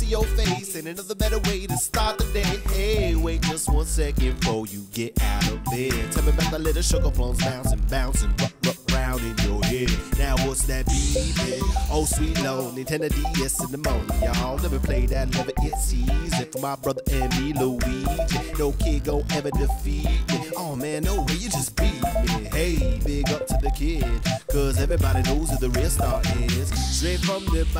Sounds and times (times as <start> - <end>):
Music: 0.0 - 27.7.